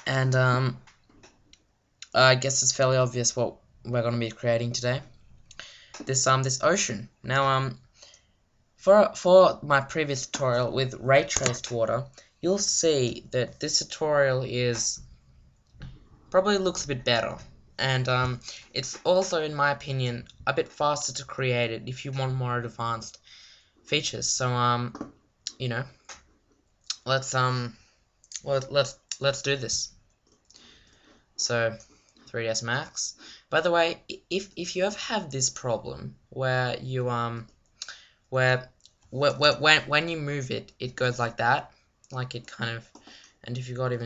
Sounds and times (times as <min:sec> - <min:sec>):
Speech: 0:00.0 - 0:00.8, 0:02.0 - 0:05.1, 0:06.0 - 0:07.8, 0:08.8 - 0:15.0, 0:16.3 - 0:23.2, 0:23.9 - 0:26.0, 0:26.9 - 0:30.0, 0:31.4 - 0:37.5, 0:38.3 - 0:44.0.